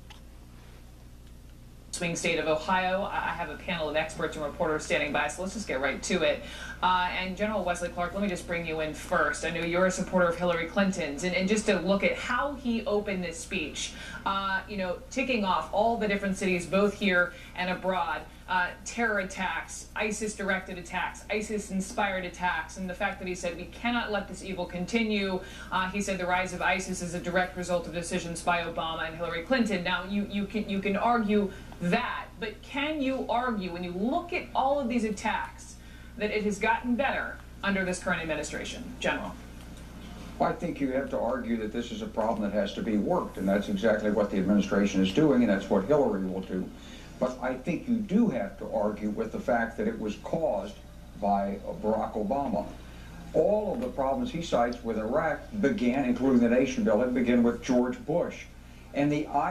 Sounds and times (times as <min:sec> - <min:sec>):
Female speech, woman speaking: 0:01.9 - 0:39.4, 0:53.4 - 0:58.4.